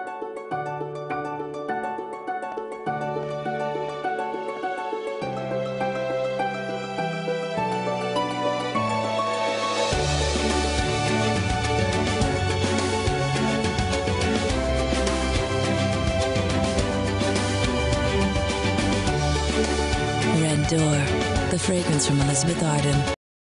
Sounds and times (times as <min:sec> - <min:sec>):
Music: 0:00.0 - 0:23.2
Speech: 0:20.3 - 0:23.2.